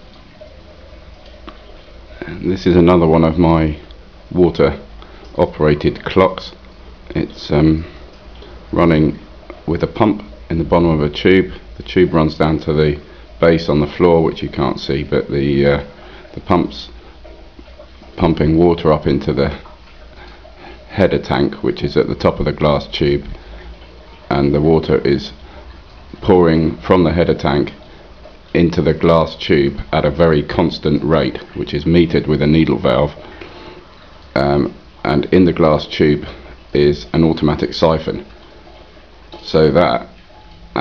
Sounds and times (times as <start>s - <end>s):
Speech: 2.2s - 8.0s, 8.7s - 17.0s, 18.2s - 19.7s, 20.9s - 23.4s, 24.2s - 25.4s, 26.2s - 27.8s, 28.5s - 33.2s, 34.3s - 38.3s, 39.4s - 40.2s.